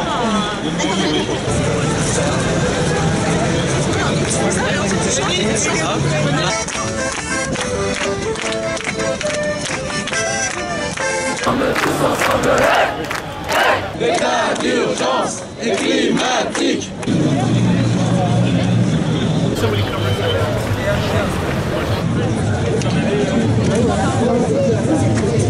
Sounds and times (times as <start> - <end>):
Speech: 0.0 - 7.0, 17.1 - 25.4
Music: 1.5 - 12.2.